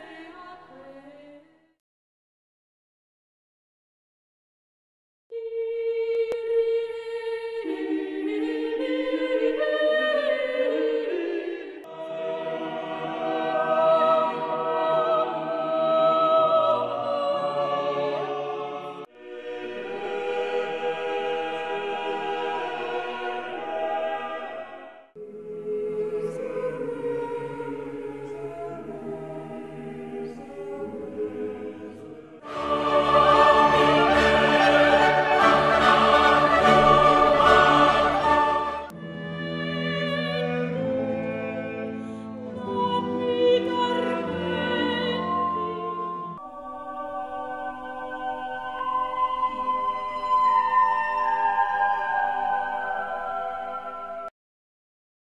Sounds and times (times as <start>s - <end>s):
Classical music: 9.2s - 54.3s.